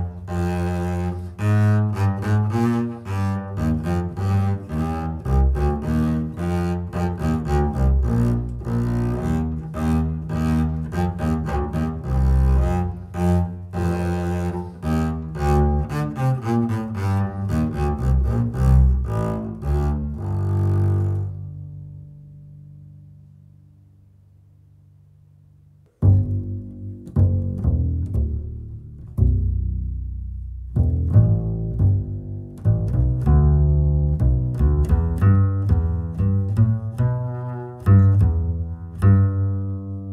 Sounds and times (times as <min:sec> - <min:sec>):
Classical music: 0:00.0 - 0:23.5, 0:26.0 - 0:40.1
Cello: 0:00.0 - 0:40.1
Double bass: 0:00.0 - 0:40.1.